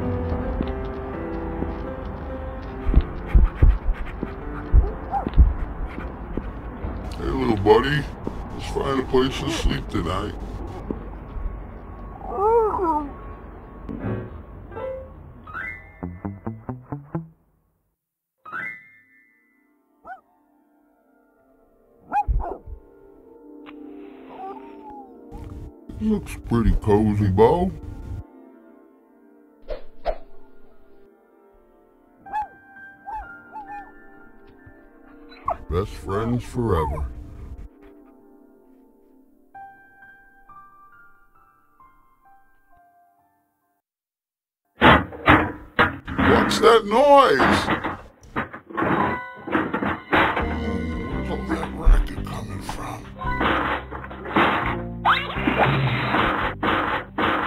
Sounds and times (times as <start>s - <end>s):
Music: 0.0s - 17.8s, 18.4s - 43.9s, 44.8s - 57.4s.